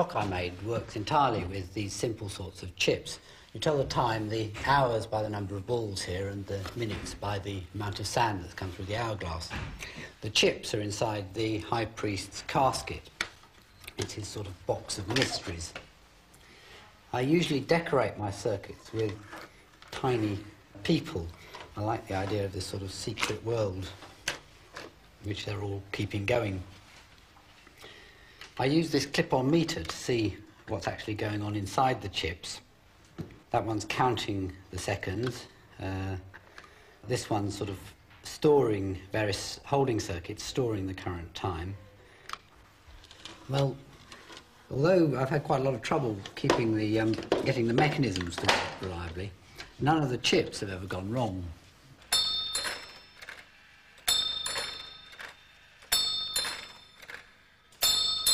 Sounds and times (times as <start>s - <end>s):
Speech: 0.0s - 13.1s, 13.9s - 15.9s, 17.1s - 24.0s, 25.2s - 26.7s, 28.6s - 32.7s, 33.5s - 36.4s, 37.0s - 42.0s, 43.5s - 43.9s, 44.7s - 51.6s.